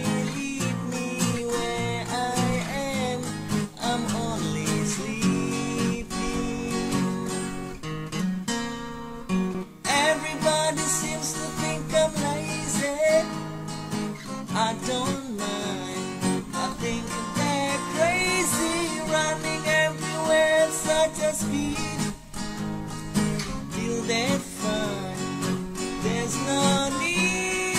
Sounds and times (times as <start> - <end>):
Acoustic guitar: 0.0 - 27.7.